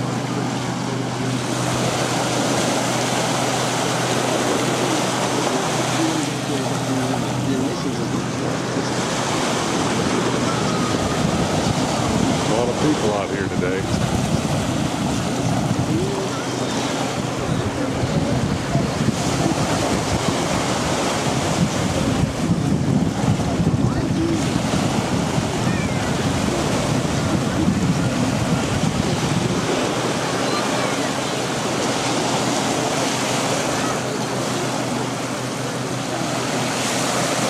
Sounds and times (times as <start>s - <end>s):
Outside, rural or natural: 0.0s - 37.5s
Speech: 5.0s - 8.9s, 12.4s - 14.0s, 23.7s - 24.6s, 29.7s - 31.7s.